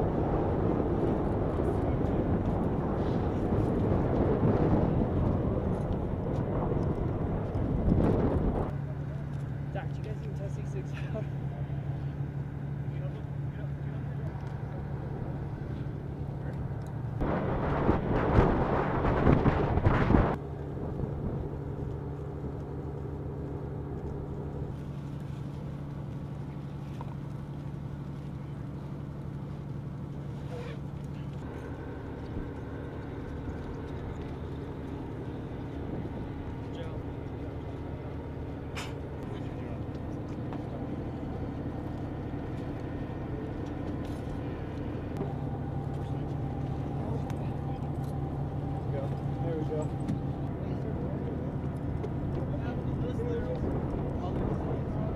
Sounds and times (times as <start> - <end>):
Speech: 8.8 - 12.0, 12.8 - 14.8, 36.7 - 37.0, 48.8 - 51.6, 52.4 - 55.1.